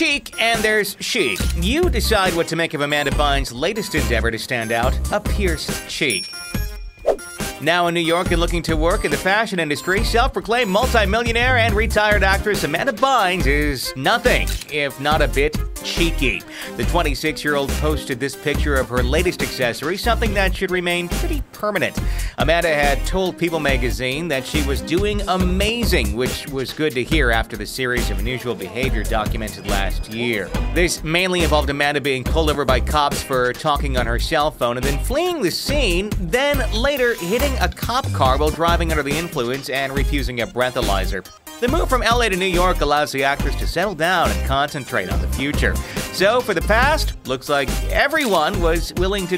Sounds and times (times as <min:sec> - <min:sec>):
Speech: 0:00.0 - 0:06.3, 0:07.6 - 0:49.3
Music: 0:00.0 - 0:49.3.